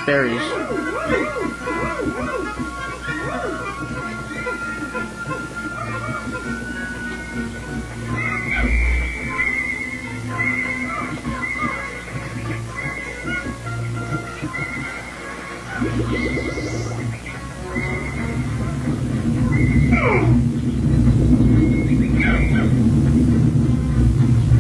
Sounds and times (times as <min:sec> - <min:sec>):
Music: 0:00.0 - 0:24.6.